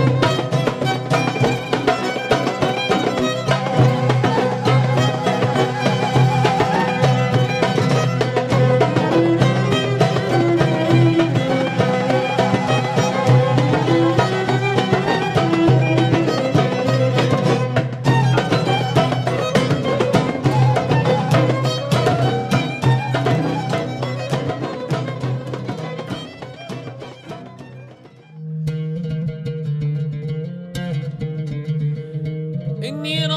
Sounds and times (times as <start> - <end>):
Folk music: 0.0 - 33.3.